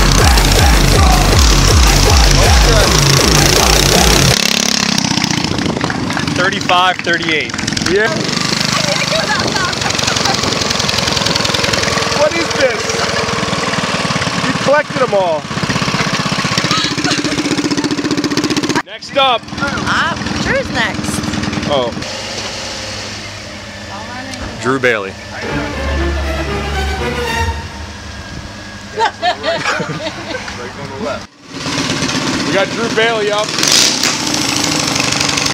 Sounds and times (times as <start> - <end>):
Music: 0.0 - 4.3, 25.4 - 28.1
Vehicle: 0.0 - 35.5.